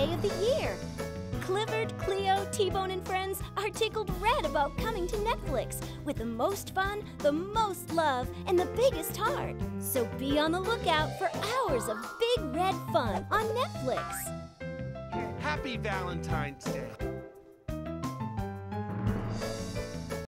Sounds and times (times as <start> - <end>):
Music: 0.0 - 20.2
Speech: 1.4 - 14.3, 15.2 - 17.0.